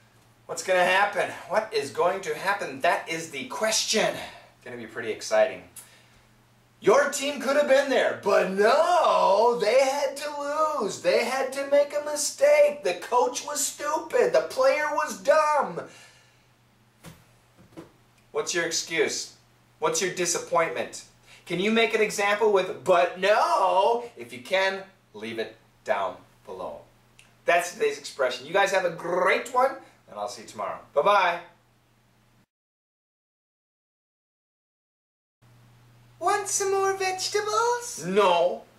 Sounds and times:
Speech: 0.5s - 5.8s, 6.8s - 15.9s, 18.3s - 31.6s, 36.2s - 38.7s.

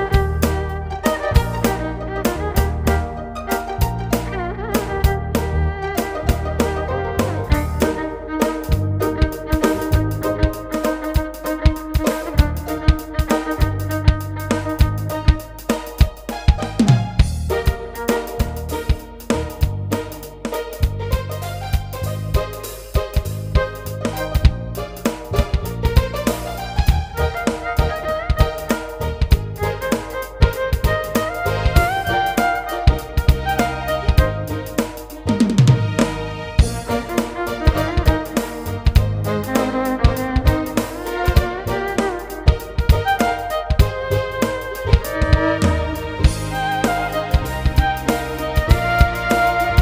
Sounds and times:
Violin, fiddle: 0.0s - 49.8s.

